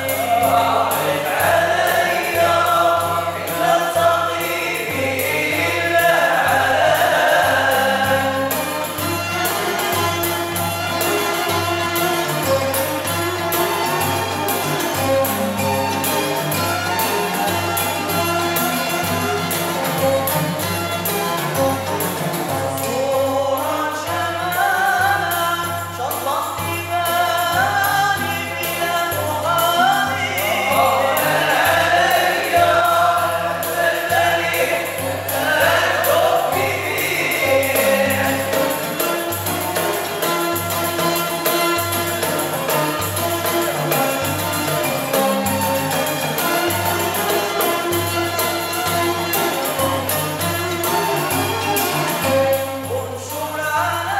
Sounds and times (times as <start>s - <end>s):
Music: 0.0s - 54.1s.